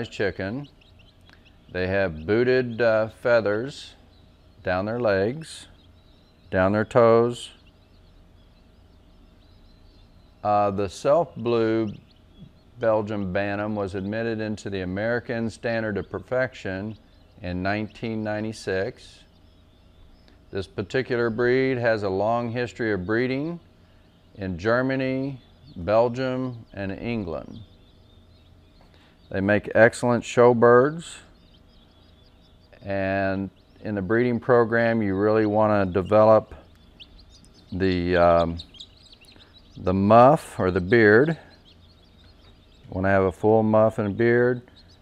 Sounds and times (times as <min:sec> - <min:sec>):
Speech: 0:00.0 - 0:00.7, 0:01.8 - 0:04.0, 0:04.6 - 0:05.8, 0:06.5 - 0:07.6, 0:10.4 - 0:12.0, 0:12.8 - 0:19.3, 0:20.6 - 0:23.6, 0:24.4 - 0:27.7, 0:29.3 - 0:31.3, 0:32.8 - 0:36.6, 0:37.7 - 0:38.6, 0:39.8 - 0:41.5, 0:42.9 - 0:44.7.